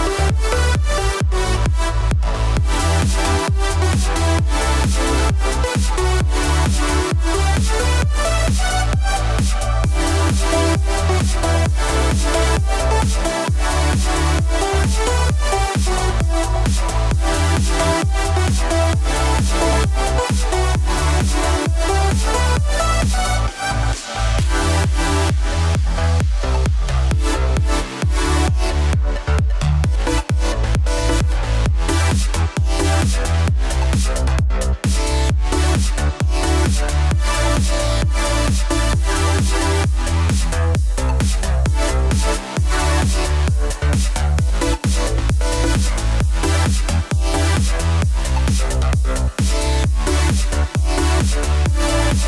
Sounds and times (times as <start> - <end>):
Music: 0.0 - 52.2.